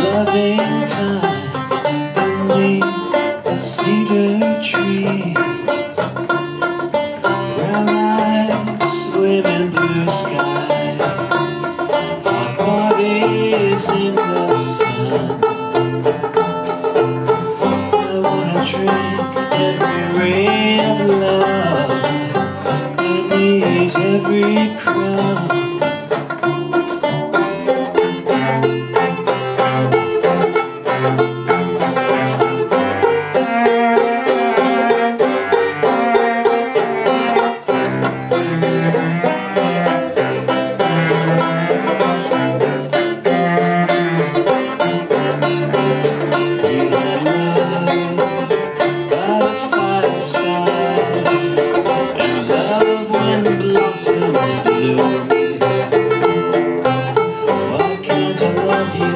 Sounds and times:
Banjo: 0.0s - 59.1s
Country: 0.0s - 59.1s.

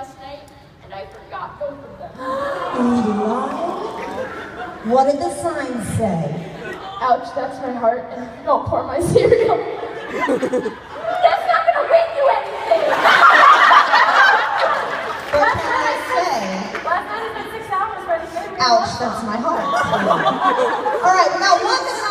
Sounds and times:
Inside, large room or hall: 0.0s - 22.1s.

